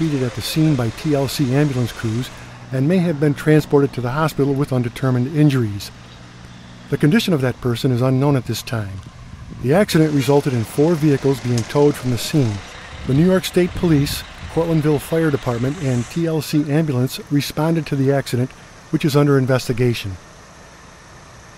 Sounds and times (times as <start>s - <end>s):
Speech: 0.0s - 6.0s, 6.9s - 9.0s, 9.6s - 20.2s
Vehicle: 0.0s - 21.5s.